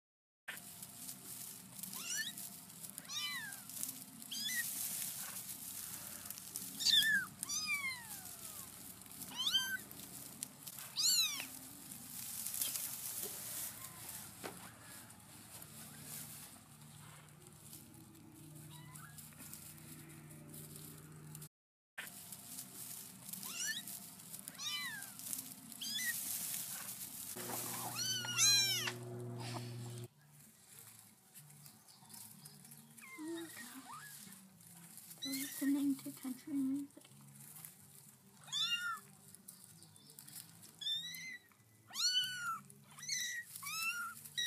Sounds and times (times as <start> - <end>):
Meow: 2.0 - 2.4, 3.0 - 3.7, 4.3 - 4.7, 6.8 - 9.8, 10.9 - 11.5, 18.6 - 19.2, 23.4 - 23.9, 24.5 - 25.2, 25.8 - 26.2, 27.8 - 29.0, 33.0 - 34.3, 38.4 - 39.1, 40.8 - 44.4.